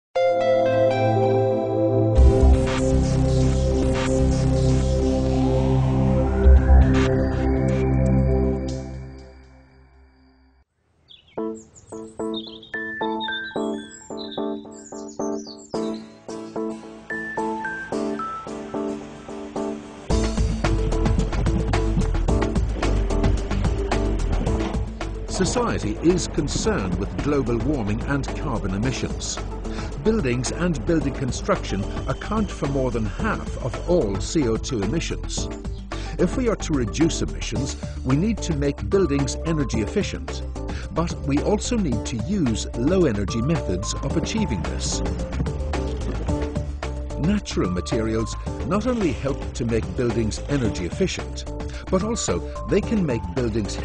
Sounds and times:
Music: 0:00.2 - 0:10.7, 0:11.3 - 0:53.8.

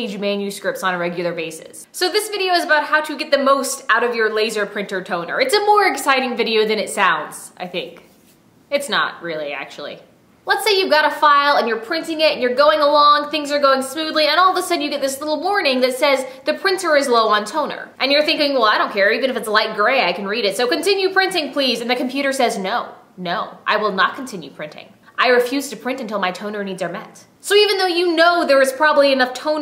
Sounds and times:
Speech: 0:00.0 - 0:08.1, 0:08.7 - 0:29.6.

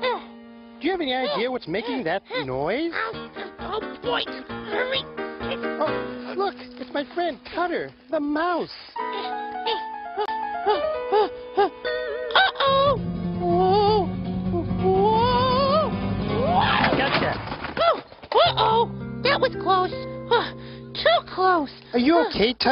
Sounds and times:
Music: 0:00.0 - 0:17.1, 0:18.4 - 0:22.7
Speech: 0:00.8 - 0:03.0, 0:21.0 - 0:22.7.

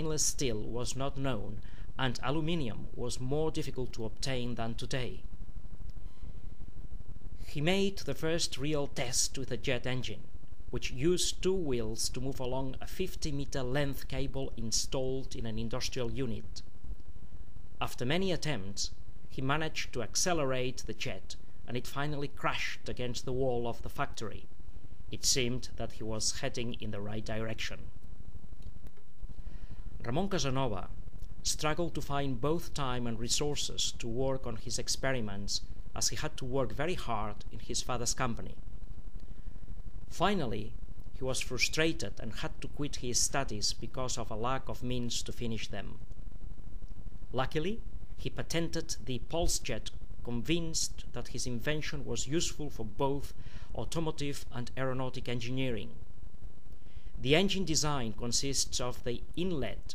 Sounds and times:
Speech: 0:00.0 - 0:05.2, 0:07.5 - 0:16.7, 0:17.8 - 0:24.5, 0:25.2 - 0:27.9, 0:30.0 - 0:38.6, 0:40.1 - 0:46.0, 0:47.3 - 0:56.0, 0:57.2 - 0:59.9.

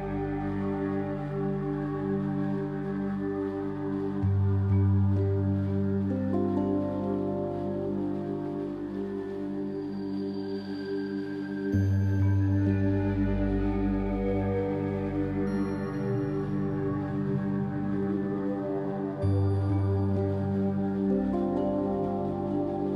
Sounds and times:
Lullaby: 0:00.0 - 0:22.9
Tender music: 0:00.0 - 0:22.9.

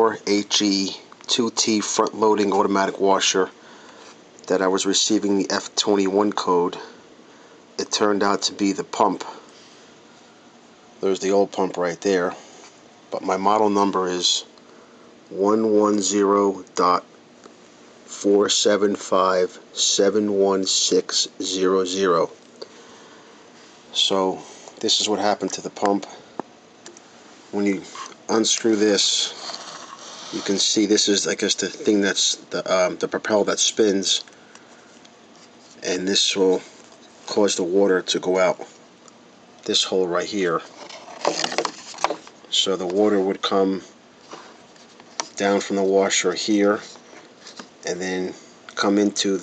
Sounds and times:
Speech: 0:00.0 - 0:03.6, 0:04.4 - 0:07.0, 0:07.8 - 0:09.5, 0:11.0 - 0:12.4, 0:13.1 - 0:14.6, 0:15.3 - 0:17.1, 0:18.1 - 0:22.4, 0:23.9 - 0:26.2, 0:27.5 - 0:29.4, 0:30.3 - 0:34.3, 0:35.8 - 0:36.7, 0:37.3 - 0:38.7, 0:39.6 - 0:40.7, 0:42.5 - 0:43.9, 0:45.4 - 0:47.0, 0:47.8 - 0:49.4.

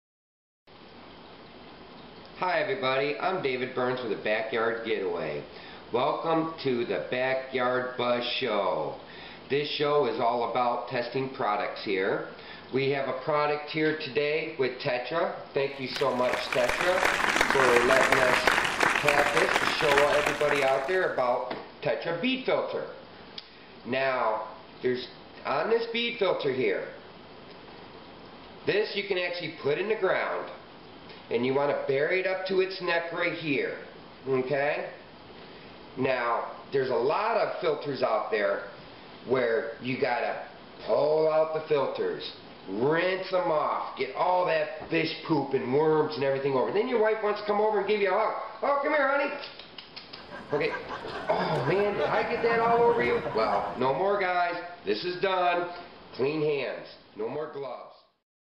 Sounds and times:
Speech: 0:02.4 - 0:23.0, 0:23.9 - 0:27.0, 0:28.6 - 0:30.6, 0:31.3 - 0:35.0, 0:36.0 - 0:49.6, 0:50.5 - 0:58.1.

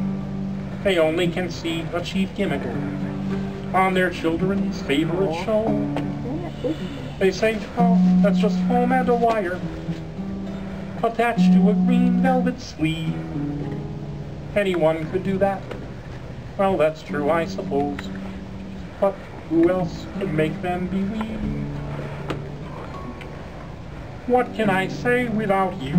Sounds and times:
Music: 0:00.0 - 0:25.9
Speech: 0:00.8 - 0:02.9, 0:03.8 - 0:09.6, 0:14.6 - 0:15.6, 0:16.6 - 0:18.1, 0:19.0 - 0:21.5, 0:24.3 - 0:25.9.

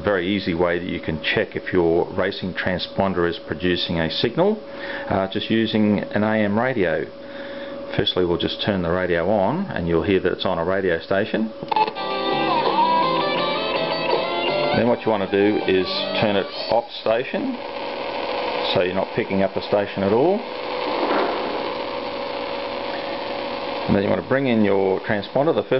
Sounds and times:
Radio: 0:11.7 - 0:25.7.

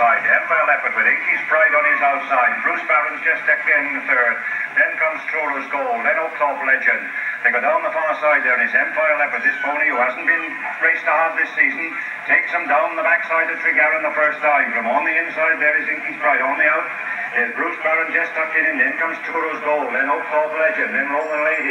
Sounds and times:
Speech: 0:00.0 - 0:21.7.

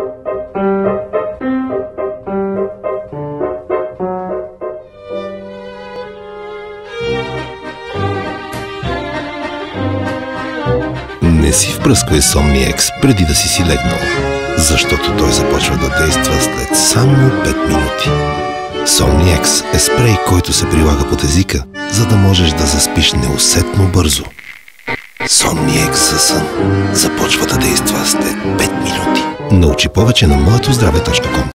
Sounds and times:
Music: 0:00.0 - 0:31.5
Speech: 0:11.2 - 0:18.2, 0:18.9 - 0:24.4, 0:25.3 - 0:31.5.

